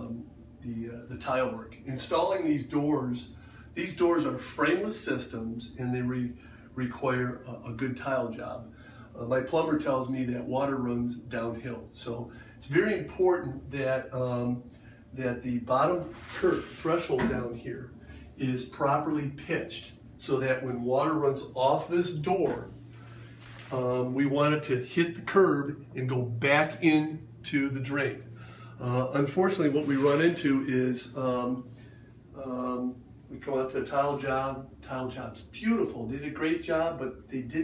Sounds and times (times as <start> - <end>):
Speech: 0.0 - 22.8, 23.6 - 31.7, 32.4 - 37.6.